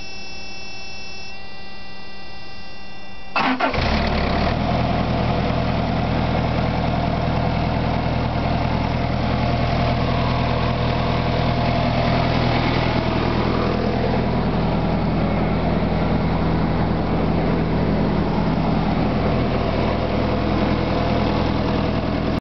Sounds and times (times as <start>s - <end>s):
Idling: 3.4s - 22.4s
Vehicle: 3.4s - 22.4s.